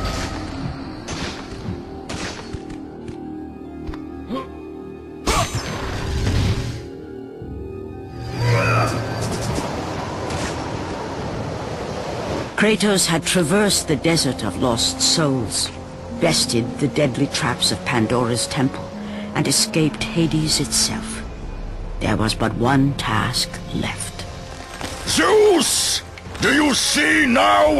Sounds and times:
Music: 0.0s - 10.2s, 12.6s - 27.7s.

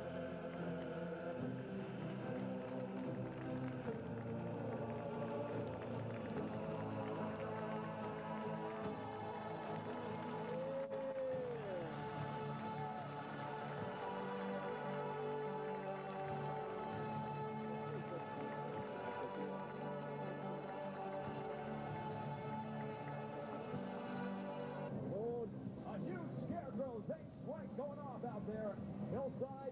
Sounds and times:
Music: 0.0s - 29.7s.

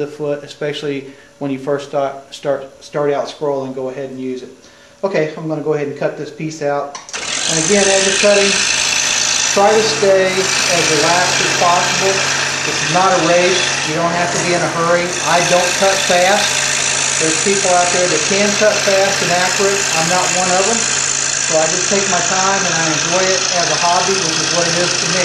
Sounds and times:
Power tool: 7.0s - 25.2s.

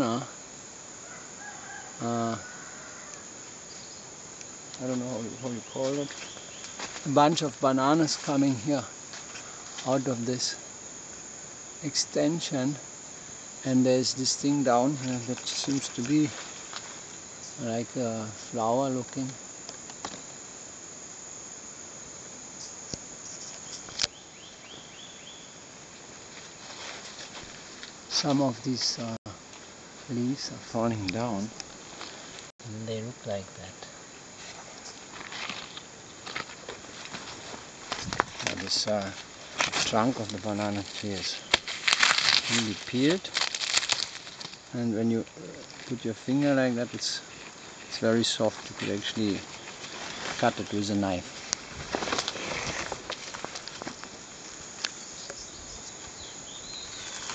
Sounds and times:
Speech: 0.0s - 0.3s, 4.8s - 6.1s, 7.0s - 8.9s, 9.8s - 10.6s, 11.8s - 12.8s, 13.6s - 16.4s, 17.6s - 19.4s, 28.1s - 29.4s, 30.1s - 31.5s, 32.6s - 33.9s, 38.5s - 39.2s, 39.8s - 41.4s, 42.5s - 43.3s, 44.7s - 47.2s, 47.9s - 49.5s, 50.4s - 51.3s
Insect: 0.0s - 57.3s.

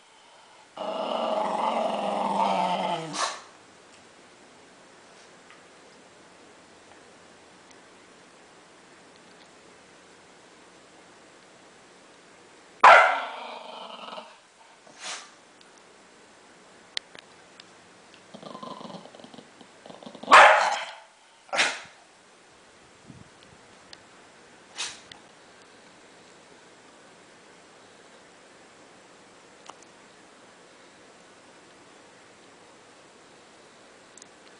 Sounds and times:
Inside, small room: 0.0s - 34.5s
Bark: 12.8s - 13.4s, 20.3s - 21.9s.

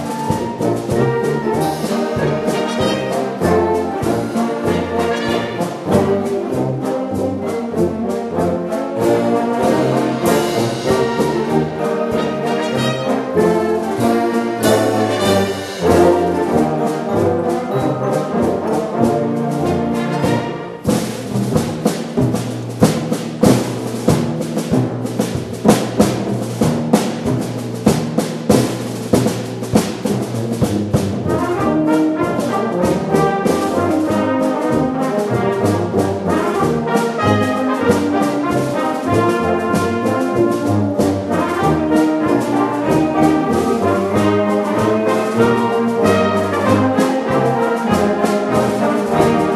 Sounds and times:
Trumpet: 0.0s - 21.1s, 31.2s - 49.5s
French horn: 0.0s - 27.8s, 28.5s - 49.5s
Classical music: 0.0s - 49.5s
Orchestra: 0.0s - 49.5s.

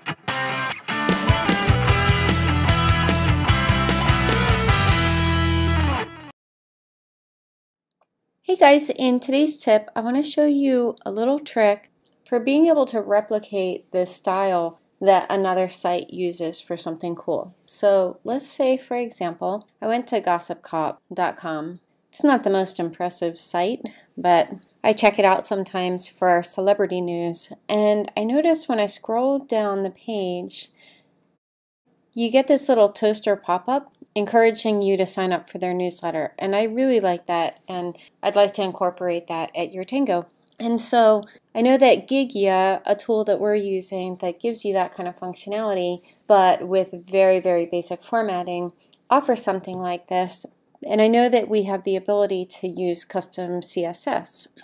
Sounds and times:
Speech: 8.5s - 30.8s, 32.2s - 54.6s.

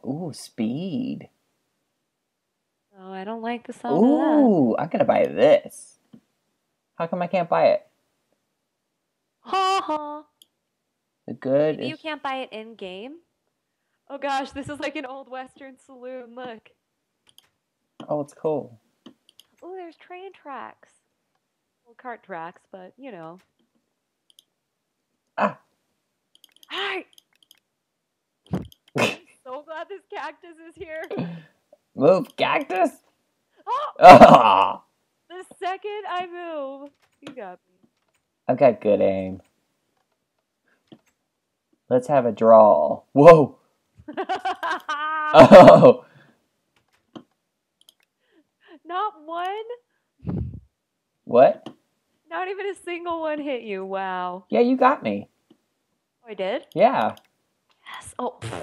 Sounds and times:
Speech: 3.0s - 5.4s, 11.3s - 13.2s, 14.1s - 16.7s, 29.5s - 31.3s
Clicking: 17.3s - 17.5s, 19.0s - 19.6s, 24.3s - 24.5s, 26.3s - 27.7s, 46.8s - 48.1s.

